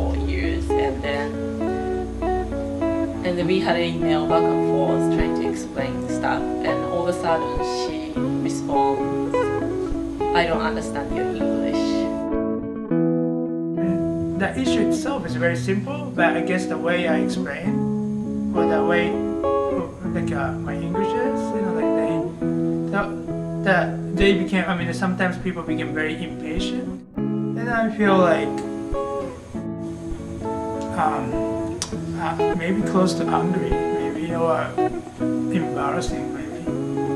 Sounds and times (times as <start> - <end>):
Speech: 0.0 - 1.4, 3.2 - 9.3, 10.4 - 12.1, 13.8 - 17.8, 18.6 - 19.2, 19.8 - 22.3, 22.9 - 26.9, 27.6 - 28.7, 30.8 - 31.4, 32.2 - 34.8, 35.5 - 37.1
Music: 0.0 - 37.1.